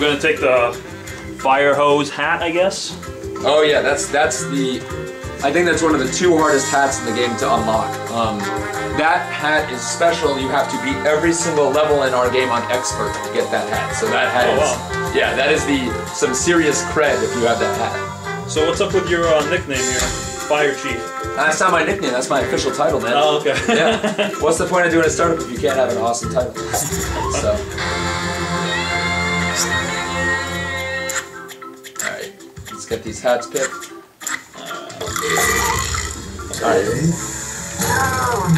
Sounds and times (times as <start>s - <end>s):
Music: 0.0s - 38.5s
Speech: 1.4s - 18.0s, 18.6s - 23.7s, 24.4s - 26.6s, 32.0s - 33.8s.